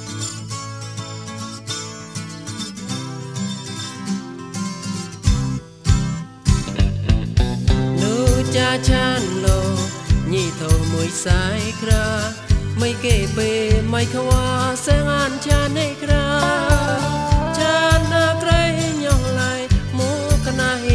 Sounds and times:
Music: 0:00.0 - 0:20.9
Singing: 0:12.8 - 0:20.9.

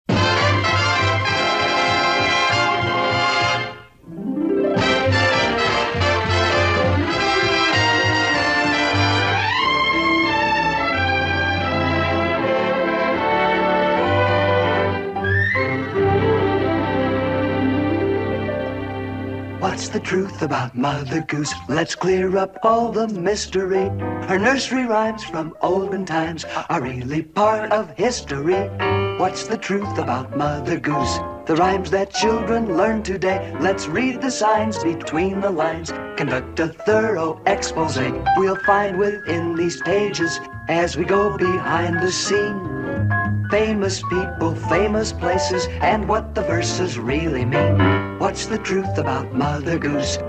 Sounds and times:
Music: 0:00.1 - 0:50.2.

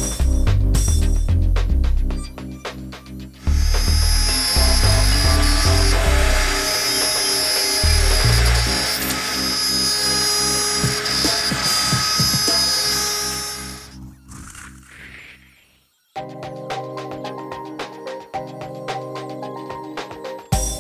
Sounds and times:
Music: 0:00.0 - 0:15.5, 0:16.2 - 0:20.8.

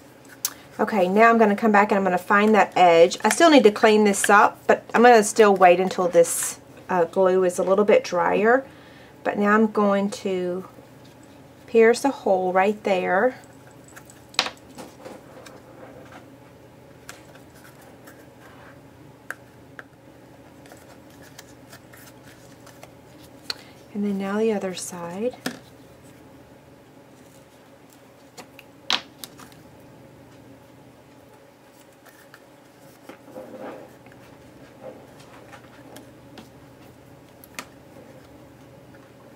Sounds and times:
Speech: 0:00.8 - 0:08.6, 0:09.3 - 0:10.7, 0:11.7 - 0:13.4, 0:23.9 - 0:25.4.

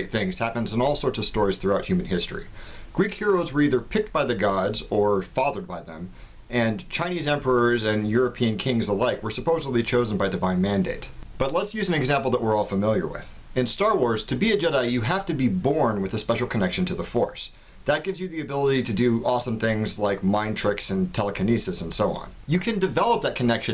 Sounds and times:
Speech: 0:00.0 - 0:23.7.

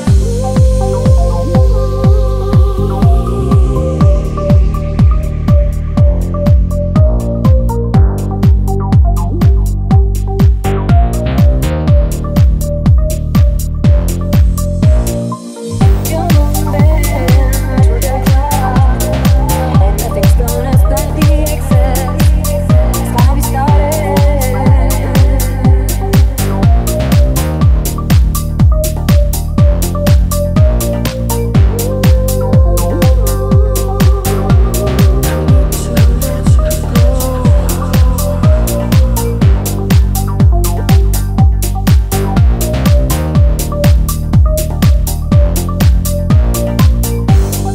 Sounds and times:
Dance music: 0:00.0 - 0:47.7.

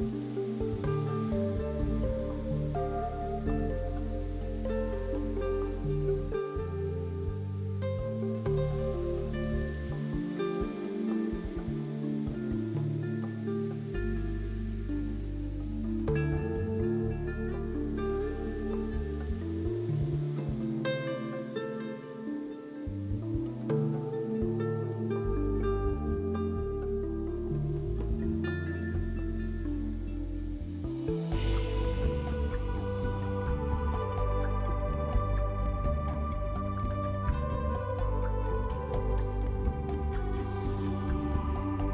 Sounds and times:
Music: 0:00.0 - 0:41.9.

